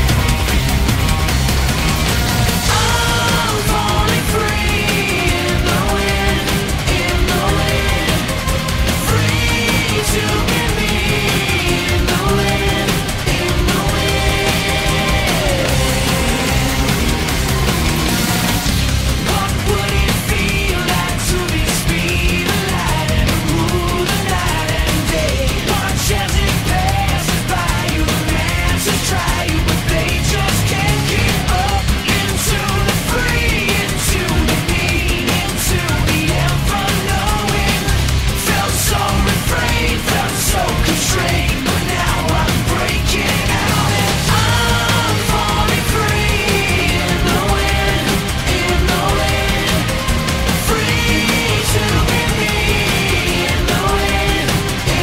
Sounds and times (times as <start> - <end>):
Music: 0.0 - 55.0.